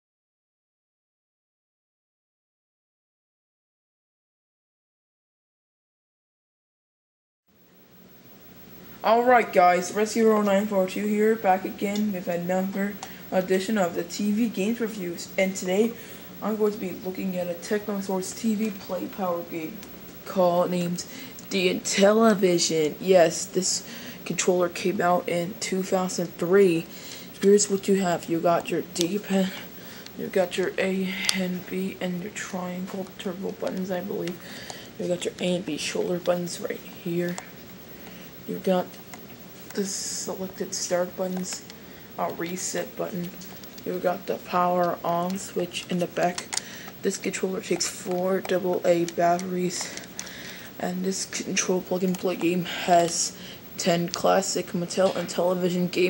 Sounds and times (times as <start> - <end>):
Speech: 9.0 - 37.5, 38.5 - 38.9, 39.7 - 41.6, 42.2 - 50.1, 50.8 - 56.0.